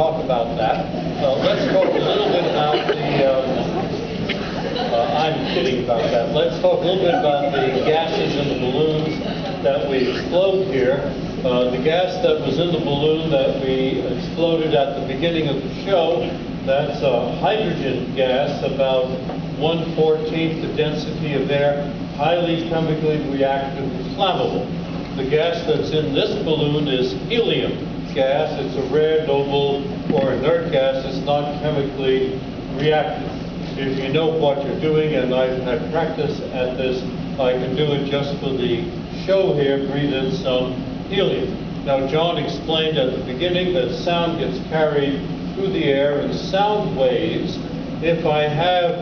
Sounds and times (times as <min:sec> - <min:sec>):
Speech: 0:00.0 - 0:49.0.